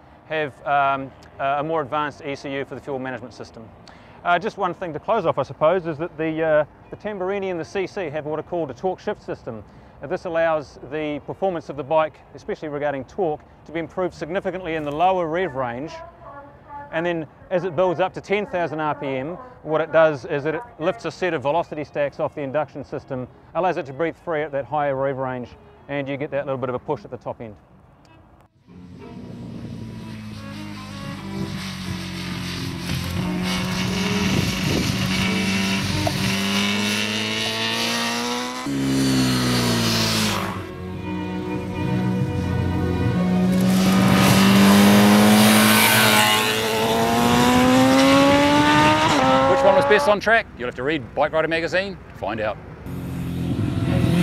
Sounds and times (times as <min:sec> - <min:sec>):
Motorcycle: 0:28.1 - 0:50.3, 0:52.7 - 0:54.2
Race car, auto racing: 0:28.1 - 0:50.4, 0:52.8 - 0:54.2
Music: 0:28.6 - 0:31.6, 0:40.7 - 0:43.6.